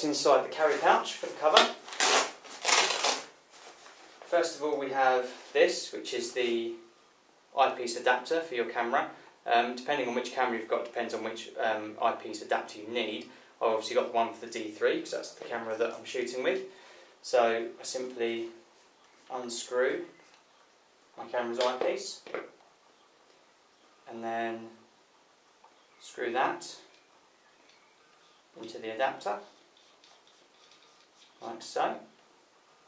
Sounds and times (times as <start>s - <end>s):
Speech: 0.0s - 1.8s, 4.3s - 6.9s, 7.5s - 18.6s, 19.3s - 20.2s, 21.2s - 22.5s, 24.1s - 24.8s, 26.0s - 26.9s, 28.6s - 29.5s, 31.4s - 32.1s.